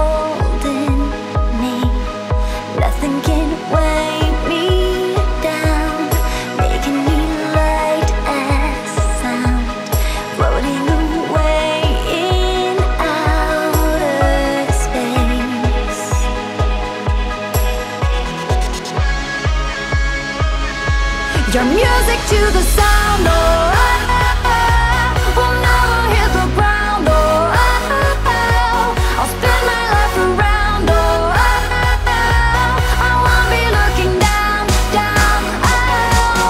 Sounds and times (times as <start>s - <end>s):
Music: 0.0s - 36.4s.